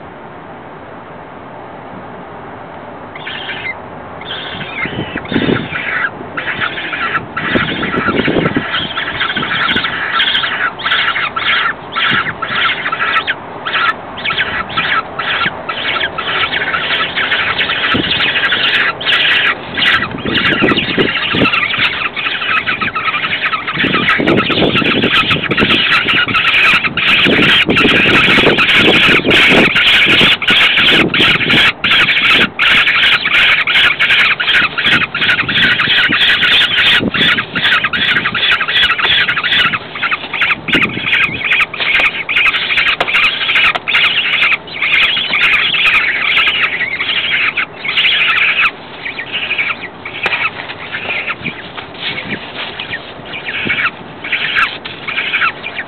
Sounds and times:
Bird: 3.1 - 55.8.

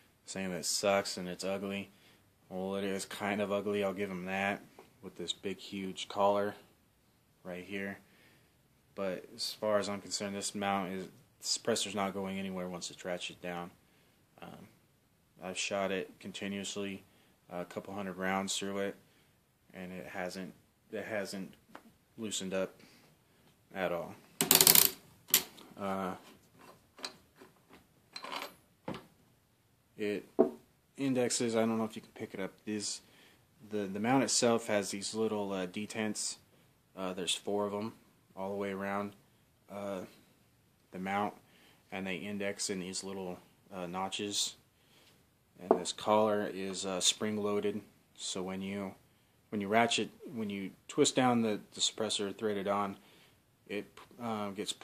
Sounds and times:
Inside, small room: 0.0 - 54.8
Speech: 0.3 - 1.9, 2.5 - 6.6, 7.4 - 8.0, 9.0 - 13.8, 15.4 - 19.0, 19.7 - 21.6, 22.2 - 22.8, 23.7 - 24.2, 25.8 - 26.3, 30.0 - 30.3, 31.0 - 33.0, 33.6 - 36.4, 37.0 - 40.2, 40.9 - 44.6, 45.6 - 53.0, 53.7 - 54.8.

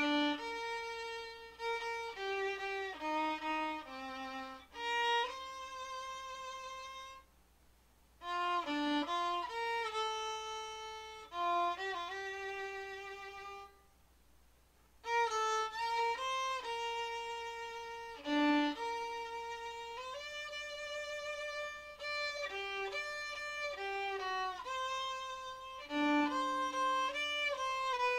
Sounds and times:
Violin, fiddle: 0.0 - 7.3, 8.2 - 13.8, 15.0 - 28.1.

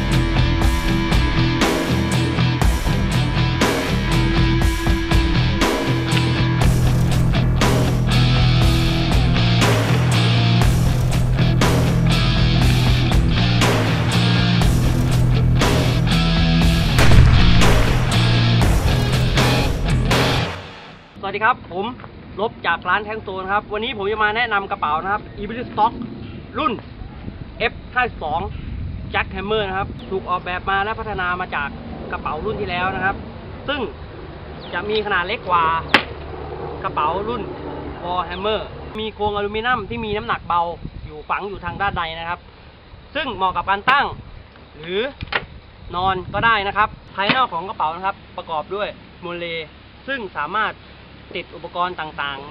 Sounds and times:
Speech: 21.2 - 26.0, 26.6 - 26.8, 27.6 - 28.5, 29.2 - 34.0, 34.7 - 35.9, 36.8 - 42.4, 43.2 - 44.2, 44.8 - 45.2, 45.9 - 52.5.

